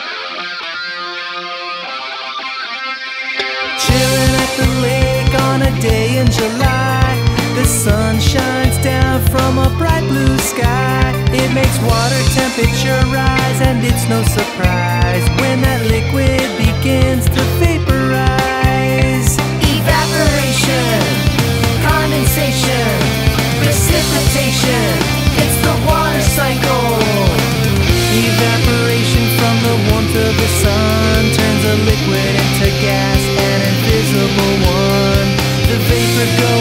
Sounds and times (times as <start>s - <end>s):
Independent music: 0.0s - 36.6s.